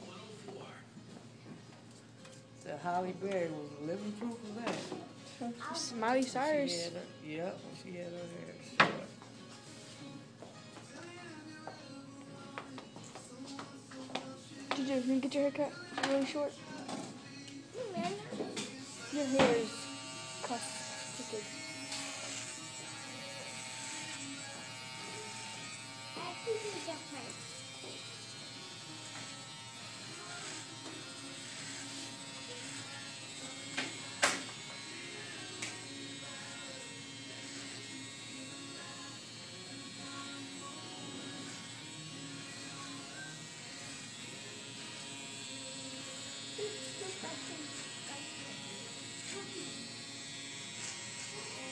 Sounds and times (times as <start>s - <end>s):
Music: 0.0s - 51.7s
Electric shaver, electric razor: 1.9s - 51.7s.